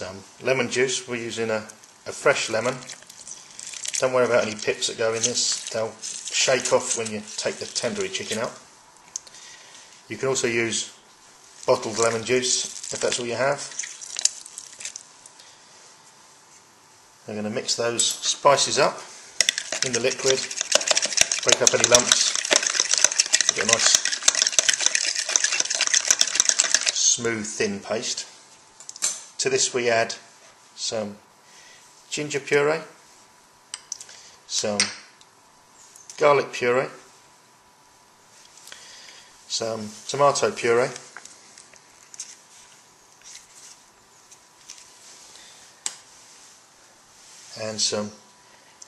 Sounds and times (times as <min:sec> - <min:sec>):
Speech: 0:00.0 - 0:02.9, 0:04.0 - 0:08.7, 0:10.1 - 0:11.0, 0:11.7 - 0:13.7, 0:17.3 - 0:19.1, 0:19.8 - 0:20.5, 0:21.4 - 0:22.4, 0:23.5 - 0:24.0, 0:27.0 - 0:28.4, 0:29.4 - 0:31.3, 0:32.1 - 0:33.0, 0:34.5 - 0:35.0, 0:36.2 - 0:37.1, 0:39.5 - 0:41.1, 0:47.5 - 0:48.3.